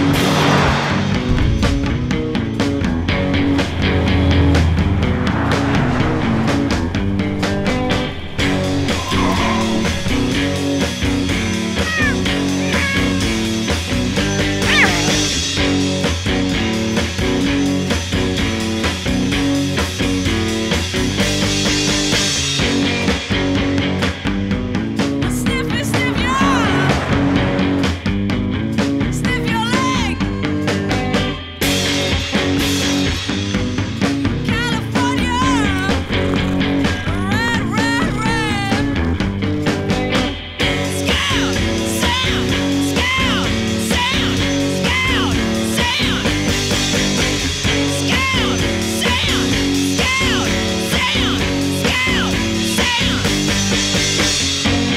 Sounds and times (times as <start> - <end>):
Music: 0.0 - 54.9
Speech: 11.8 - 13.3, 25.2 - 26.9, 29.1 - 30.3, 34.5 - 36.0, 37.0 - 39.0.